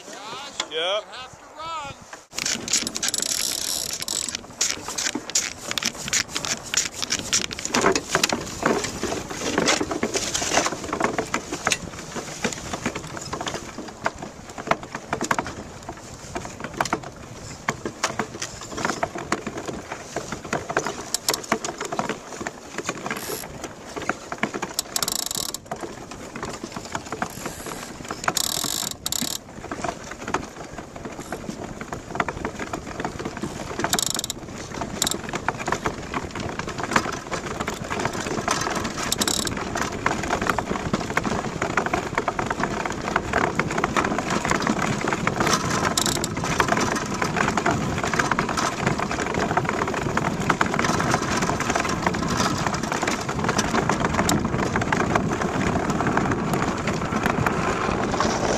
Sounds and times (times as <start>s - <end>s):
Boat, Water vehicle: 0.0s - 58.5s.